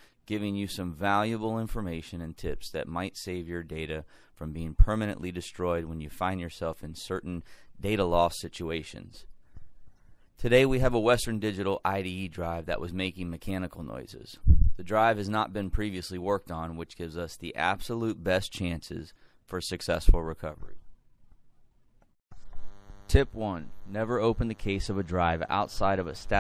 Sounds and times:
Speech: 0:00.3 - 0:09.3, 0:10.4 - 0:20.8, 0:23.1 - 0:26.4.

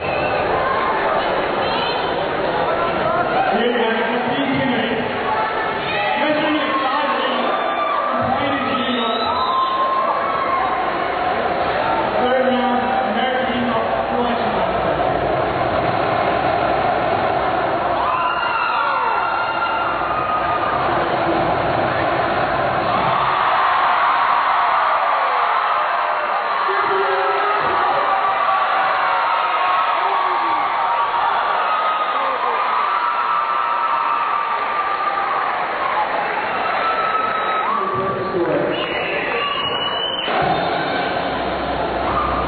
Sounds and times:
Speech: 0:02.7 - 0:09.4, 0:12.2 - 0:14.8, 0:26.7 - 0:27.9, 0:37.7 - 0:38.9.

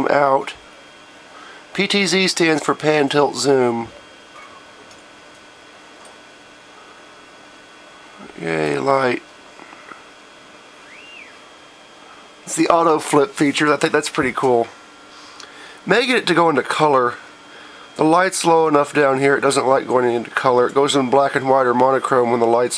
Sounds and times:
Speech: 0:00.0 - 0:00.6, 0:01.8 - 0:03.9, 0:08.2 - 0:09.3, 0:12.5 - 0:14.8, 0:15.9 - 0:17.2, 0:18.0 - 0:22.7.

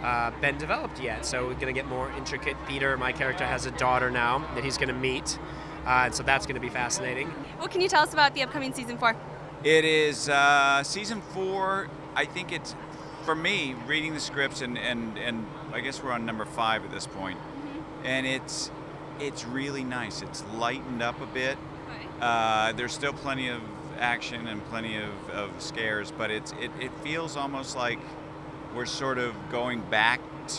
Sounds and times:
Speech: 0:00.0 - 0:12.7, 0:13.3 - 0:17.4, 0:18.1 - 0:28.0, 0:28.8 - 0:30.5.

